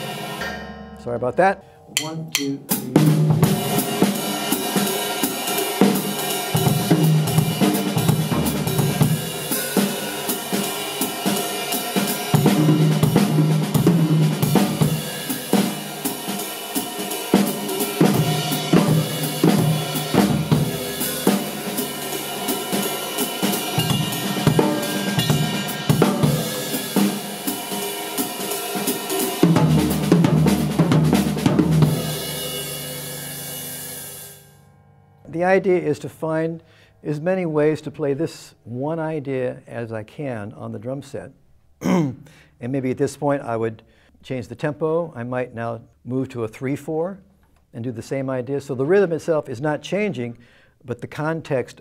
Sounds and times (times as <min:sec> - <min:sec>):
Drum kit: 0:00.0 - 0:34.4.